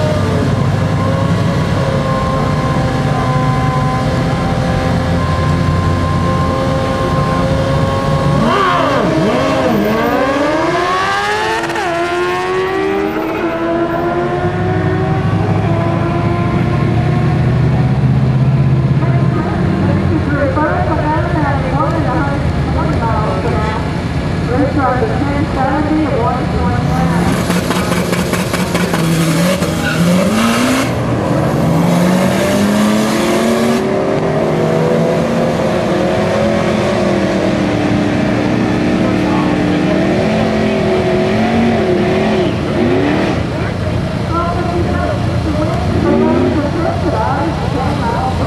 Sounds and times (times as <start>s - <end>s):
Race car, auto racing: 0.0s - 48.4s.